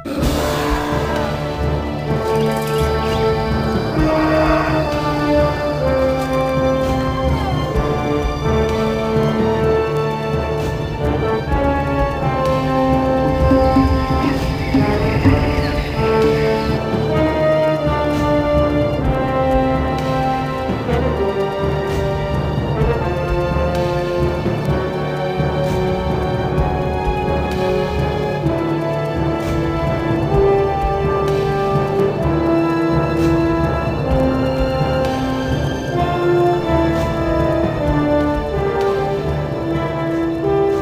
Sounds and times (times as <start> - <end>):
Music: 0.0 - 40.8.